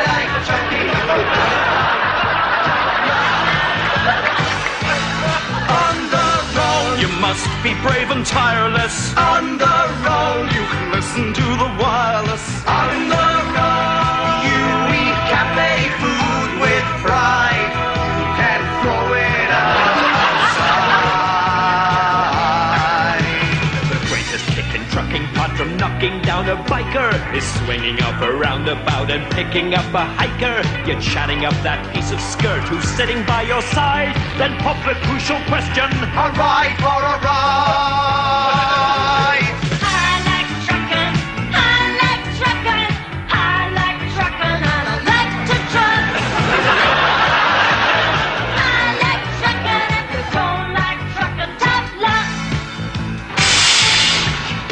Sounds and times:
Music: 0:00.0 - 0:54.7.

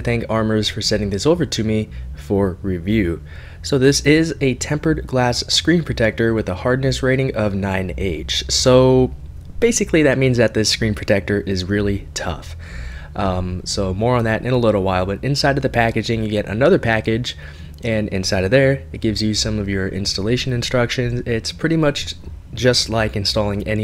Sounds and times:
Speech: 0:00.0 - 0:23.8.

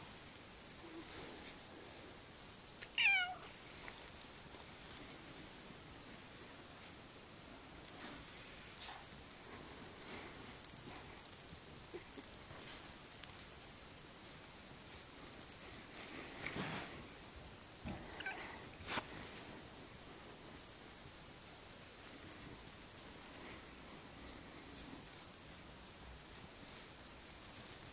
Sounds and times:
Cat: 0:02.8 - 0:03.5, 0:18.2 - 0:18.6.

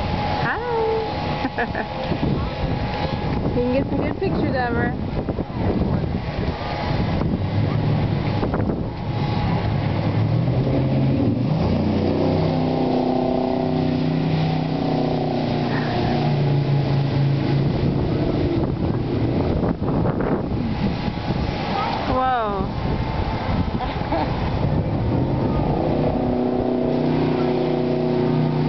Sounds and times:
Sailboat, sailing ship: 0:00.0 - 0:28.6.

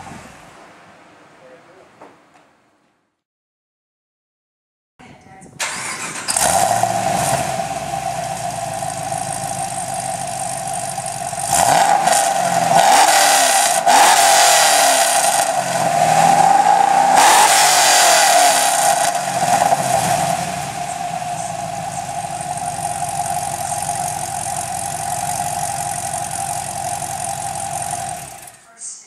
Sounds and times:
Car: 0:00.0 - 0:01.4, 0:05.6 - 0:28.7
Medium engine (mid frequency): 0:05.6 - 0:28.6.

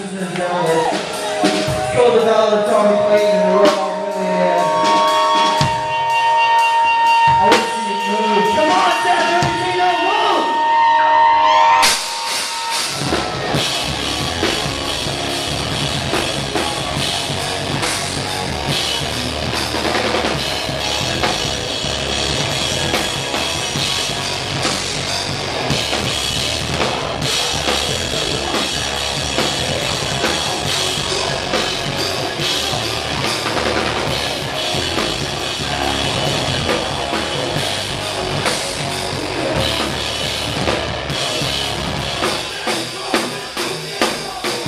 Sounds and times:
Music: 0:00.0 - 0:11.2, 0:11.8 - 0:44.6.

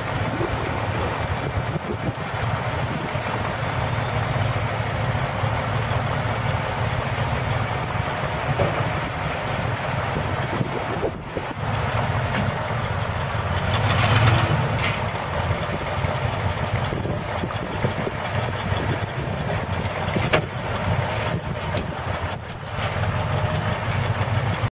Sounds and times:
Idling: 0:00.0 - 0:24.7
Truck: 0:00.0 - 0:24.7.

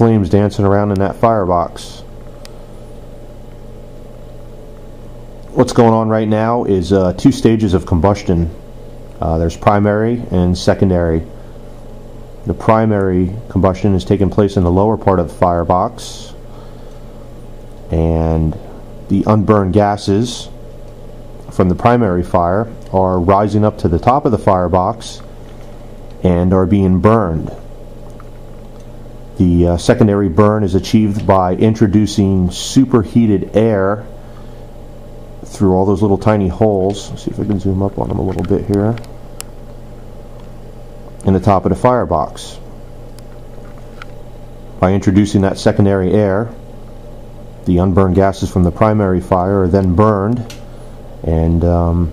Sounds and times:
Speech: 0:00.0 - 0:02.1, 0:05.5 - 0:08.6, 0:09.2 - 0:11.3, 0:12.4 - 0:16.4, 0:17.9 - 0:20.6, 0:21.5 - 0:25.3, 0:26.2 - 0:27.7, 0:29.4 - 0:34.1, 0:35.4 - 0:39.1, 0:41.2 - 0:42.7, 0:44.8 - 0:46.6, 0:47.7 - 0:50.6, 0:51.2 - 0:52.1.

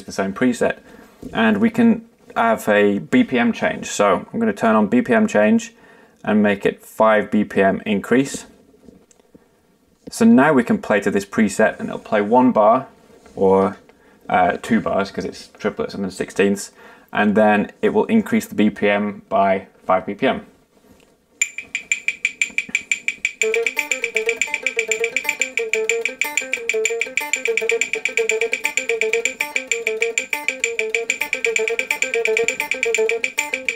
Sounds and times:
Speech: 0:00.0 - 0:08.6, 0:10.1 - 0:20.5
Inside, small room: 0:00.0 - 0:33.7.

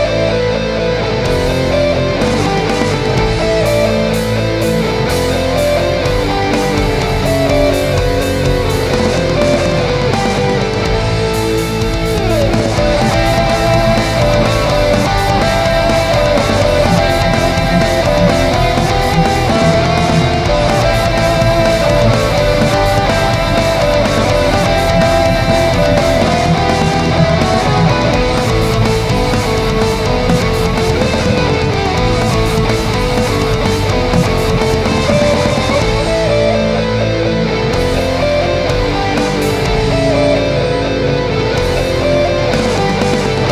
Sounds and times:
Electric guitar: 0:00.0 - 0:43.5
Strum: 0:00.2 - 0:43.5.

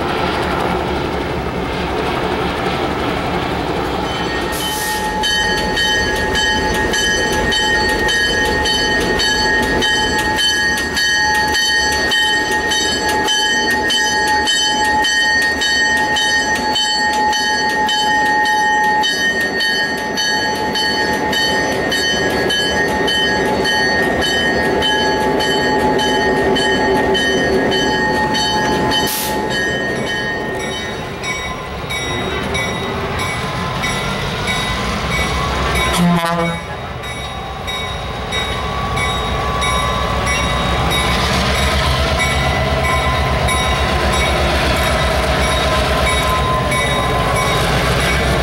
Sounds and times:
Railroad car, train wagon: 0:00.0 - 0:48.4
Train horn: 0:35.9 - 0:36.8.

